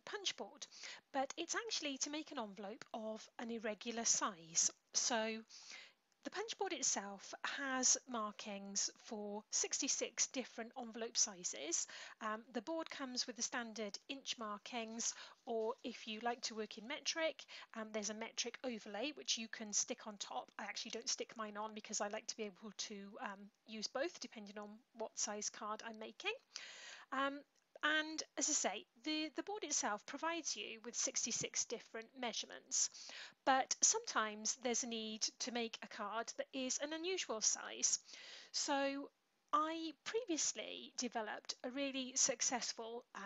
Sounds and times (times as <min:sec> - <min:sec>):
Speech: 0:00.0 - 0:05.5, 0:06.2 - 0:26.5, 0:27.1 - 0:43.2.